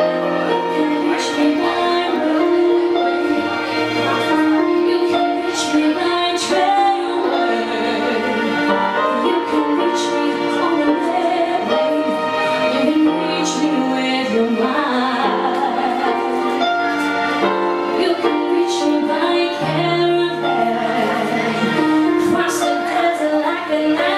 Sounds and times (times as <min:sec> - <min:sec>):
Music: 0:00.0 - 0:24.1
Female singing: 0:00.5 - 0:03.5, 0:04.1 - 0:16.5, 0:17.9 - 0:24.1.